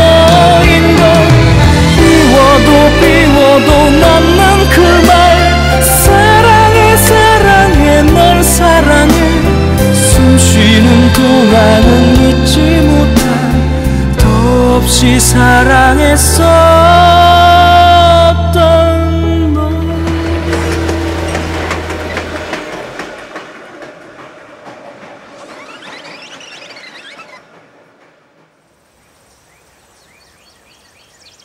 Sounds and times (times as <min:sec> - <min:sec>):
Outside, rural or natural: 0:00.0 - 0:31.4.